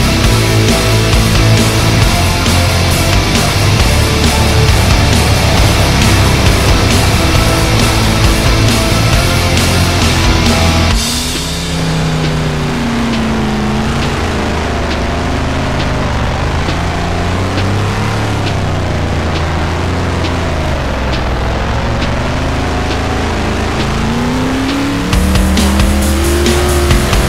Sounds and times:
Car: 0.0 - 27.2
Music: 0.0 - 27.2.

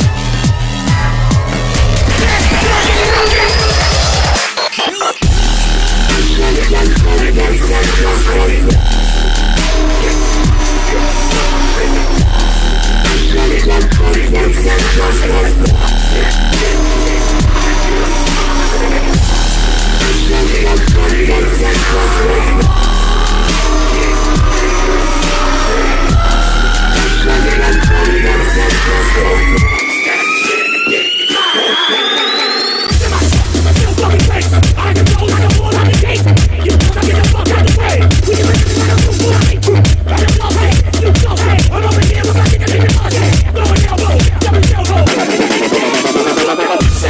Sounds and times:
Jingle (music): 9.7 - 47.0.

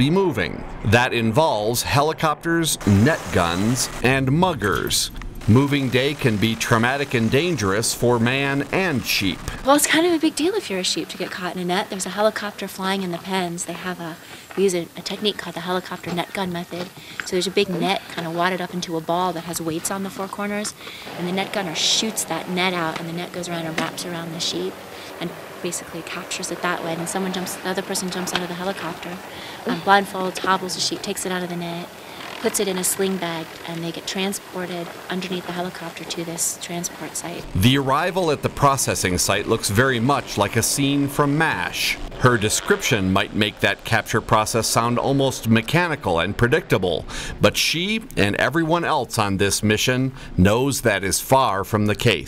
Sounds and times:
Speech: 0.0 - 52.2.

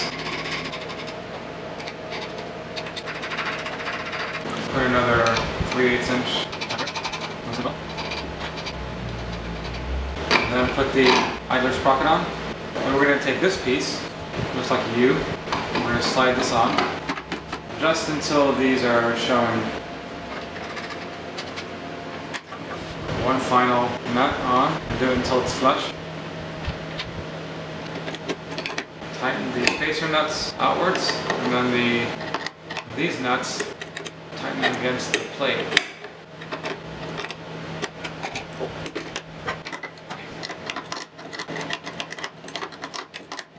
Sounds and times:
Speech: 4.6 - 6.5, 7.4 - 7.8, 10.4 - 16.9, 17.7 - 19.8, 23.1 - 26.0, 29.2 - 32.2, 32.9 - 33.8, 34.4 - 35.8.

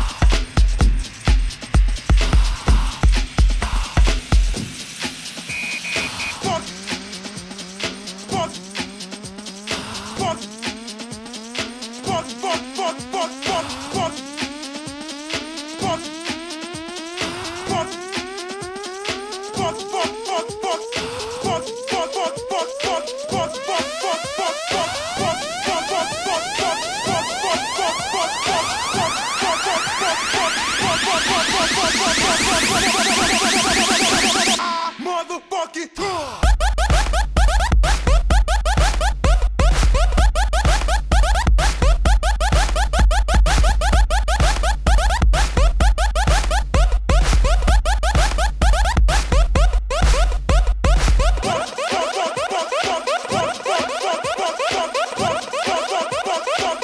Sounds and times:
Music: 0.0 - 56.8.

